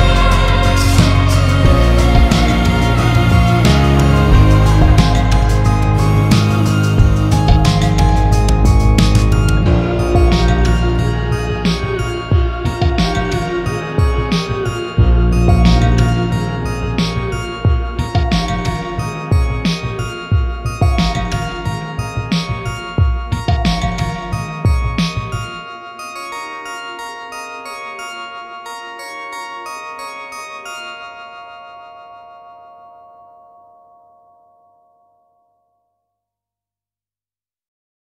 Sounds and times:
Music: 0.0 - 36.2.

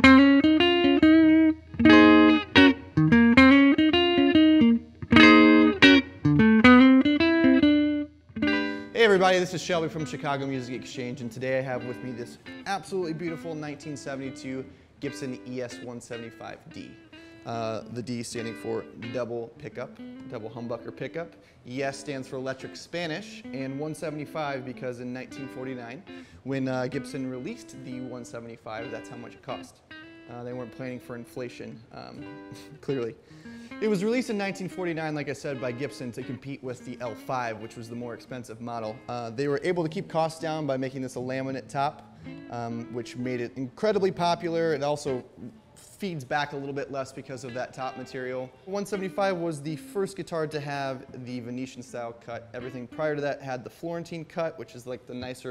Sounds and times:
Electric guitar: 0.0 - 9.0, 9.8 - 49.9
Bass guitar: 0.0 - 9.2, 40.7 - 45.7
Strum: 0.0 - 50.0
Speech: 9.0 - 33.2, 33.8 - 55.5.

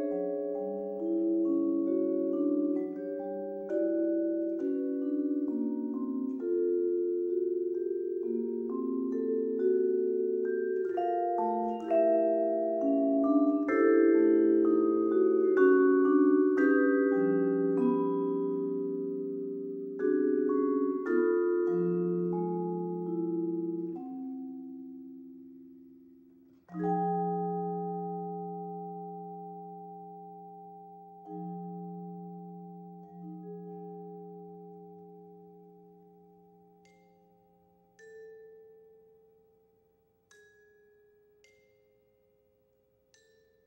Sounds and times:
Marimba, xylophone: 0.0 - 43.6
Vibraphone: 0.0 - 43.6.

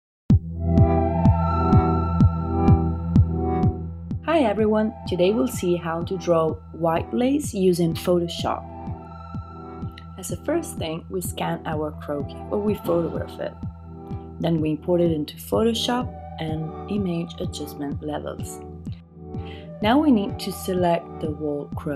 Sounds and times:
Synthesizer: 0.3 - 21.9
Speech: 4.3 - 8.6, 10.1 - 13.5, 14.4 - 18.6, 19.8 - 21.9.

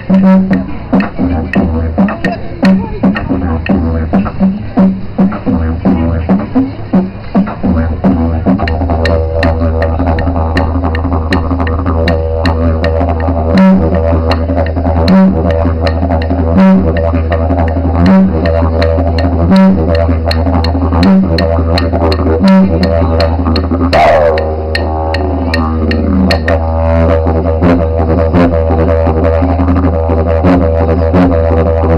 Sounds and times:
Didgeridoo: 0.0 - 31.9.

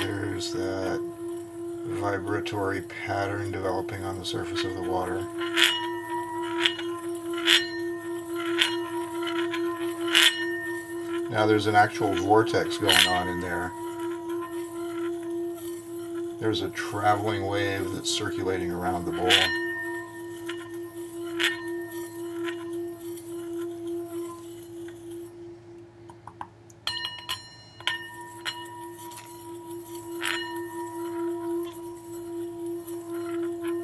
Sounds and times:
Singing bowl: 0.0 - 25.8, 26.8 - 33.8.

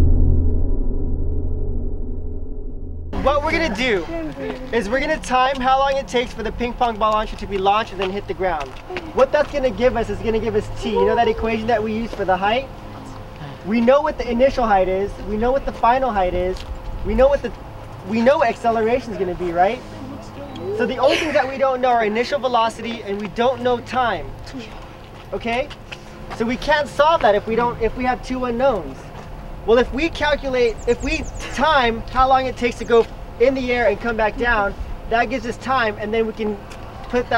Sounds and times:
Speech: 3.2 - 12.7, 13.6 - 25.8, 26.4 - 29.1, 29.7 - 37.3.

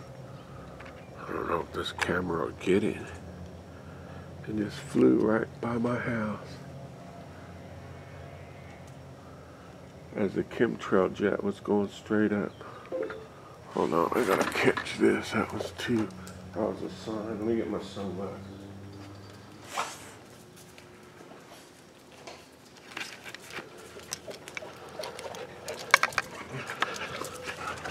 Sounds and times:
Speech: 1.2 - 3.2, 4.4 - 6.6, 10.2 - 12.6, 13.7 - 18.5.

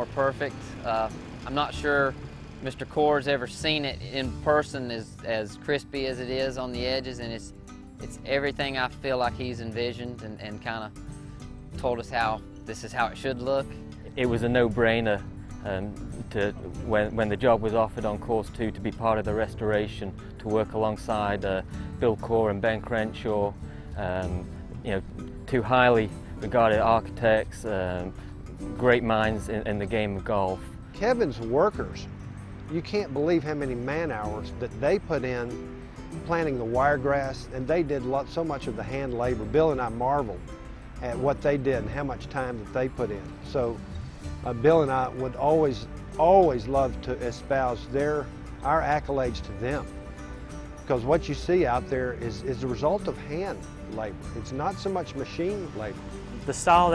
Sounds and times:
Speech: 0.0 - 10.9, 11.8 - 28.1, 28.8 - 32.1, 32.7 - 35.6, 36.2 - 40.4, 41.0 - 43.8, 44.5 - 49.9, 50.9 - 56.9
Music: 0.0 - 56.9.

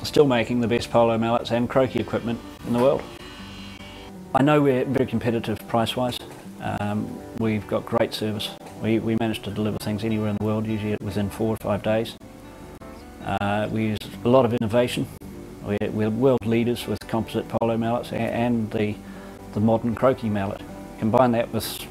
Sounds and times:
Speech: 0.0 - 3.0, 4.4 - 12.2, 13.2 - 21.9.

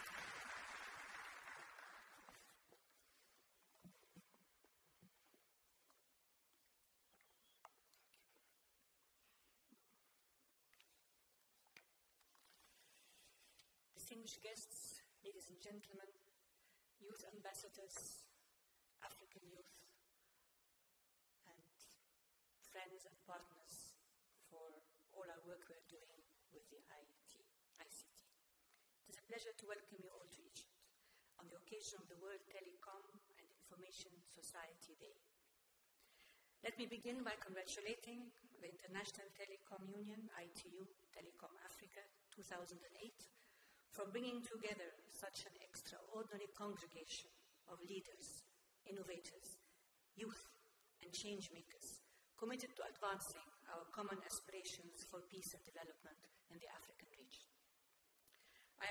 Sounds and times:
Narration, monologue: 0.0 - 58.9
Female speech, woman speaking: 14.0 - 16.2, 17.0 - 18.4, 19.0 - 20.0, 21.4 - 22.0, 22.6 - 28.3, 29.1 - 30.8, 31.4 - 35.3, 36.6 - 43.3, 44.0 - 49.6, 50.2 - 57.5.

